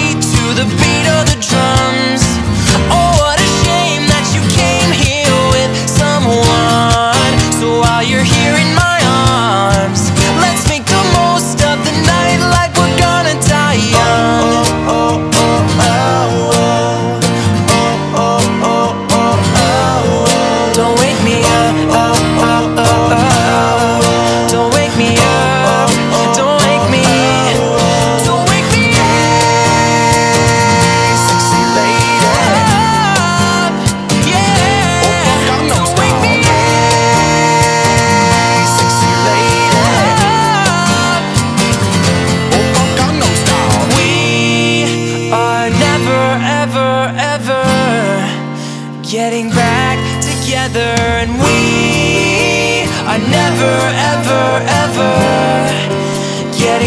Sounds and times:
Music: 0.0s - 56.8s.

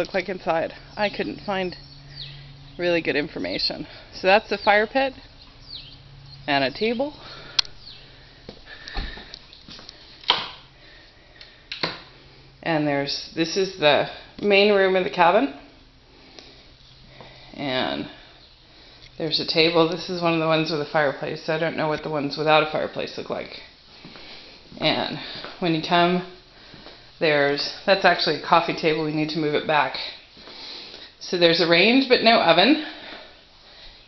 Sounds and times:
Speech: 0.0s - 1.8s, 2.8s - 5.2s, 6.5s - 7.2s, 12.6s - 15.6s, 17.6s - 18.2s, 19.2s - 23.6s, 24.8s - 26.4s, 27.2s - 30.2s, 31.2s - 33.0s.

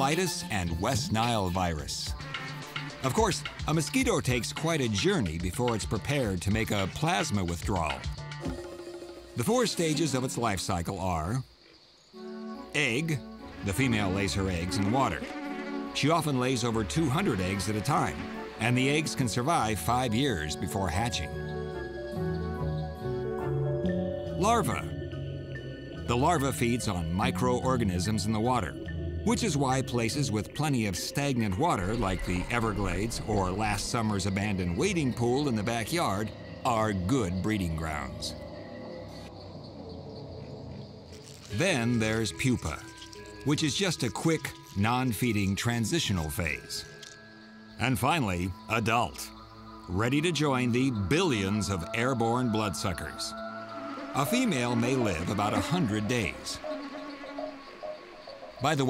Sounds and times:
Speech: 0.0s - 2.1s, 3.0s - 8.1s, 9.4s - 11.5s, 12.8s - 15.3s, 16.0s - 21.4s, 24.4s - 24.9s, 26.1s - 38.4s, 41.5s - 46.9s, 47.8s - 49.3s, 49.9s - 53.3s, 54.2s - 56.6s, 58.6s - 58.8s
Music: 0.0s - 58.8s.

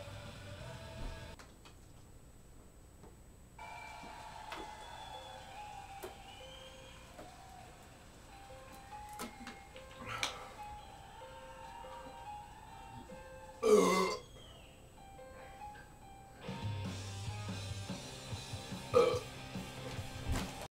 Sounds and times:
Music: 0.0s - 1.4s, 3.6s - 20.7s
Burping, eructation: 13.6s - 14.2s, 18.9s - 19.3s.

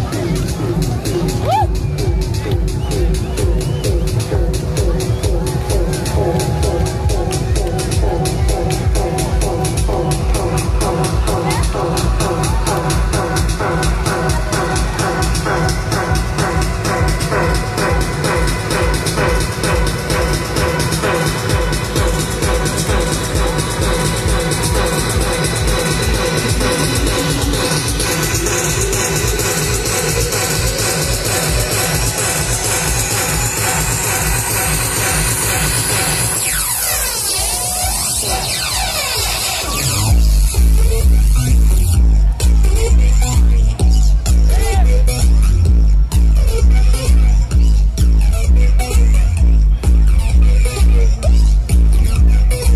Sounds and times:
House music: 0.0s - 52.7s.

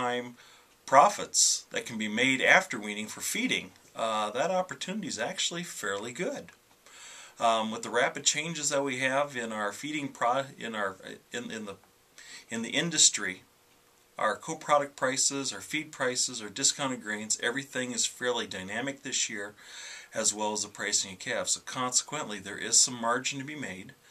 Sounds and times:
Speech: 0.0s - 6.6s, 7.4s - 11.8s, 12.5s - 13.5s, 14.2s - 24.0s.

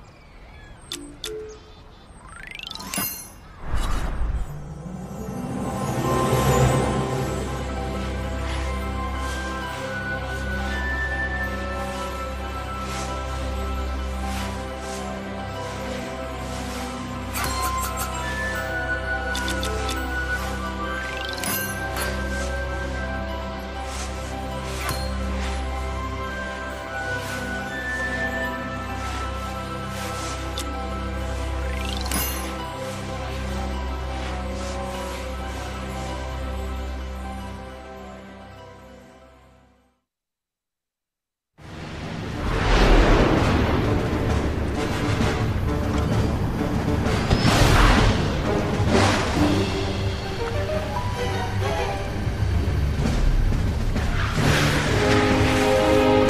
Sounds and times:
Music: 0.9s - 40.1s, 41.6s - 56.2s.

